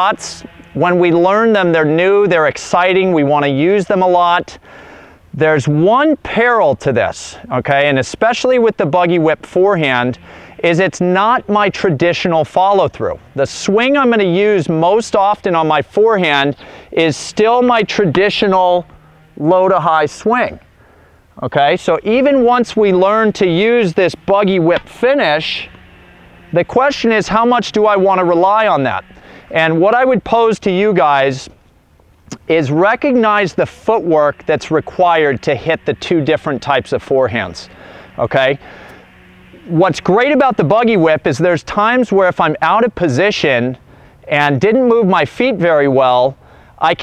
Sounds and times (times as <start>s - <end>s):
Speech: 0.0s - 4.6s, 5.4s - 20.6s, 21.4s - 25.7s, 26.5s - 31.5s, 32.3s - 38.6s, 39.6s - 47.0s.